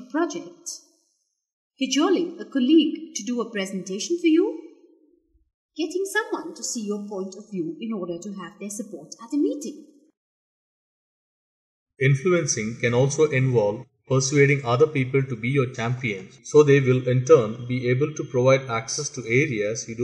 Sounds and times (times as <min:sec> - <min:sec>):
Speech: 0:00.0 - 0:00.8, 0:01.8 - 0:04.6, 0:05.8 - 0:09.7, 0:12.0 - 0:20.0.